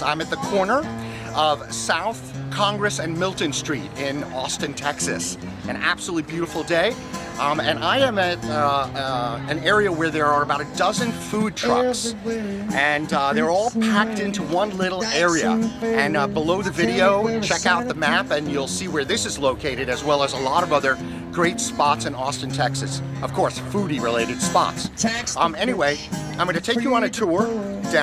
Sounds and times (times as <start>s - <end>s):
Speech: 0.0s - 12.1s, 12.7s - 28.0s
Music: 0.0s - 28.0s.